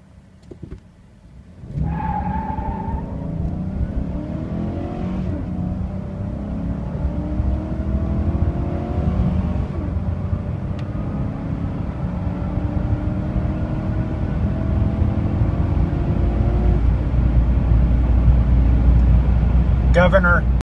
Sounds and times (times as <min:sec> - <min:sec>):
Speech: 0:19.9 - 0:20.5.